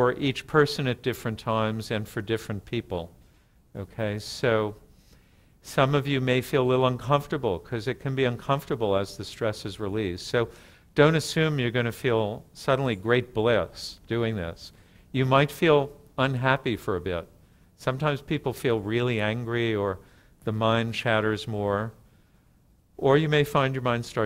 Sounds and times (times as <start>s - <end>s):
Speech: 0.0s - 4.8s, 5.6s - 22.0s, 23.0s - 24.2s.